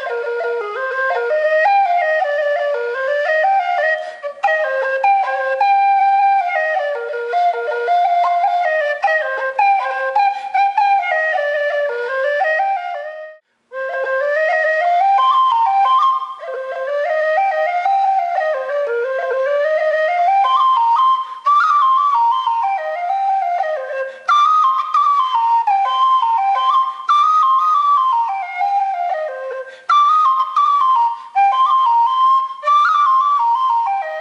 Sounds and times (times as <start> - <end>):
Flute: 0.0 - 34.2.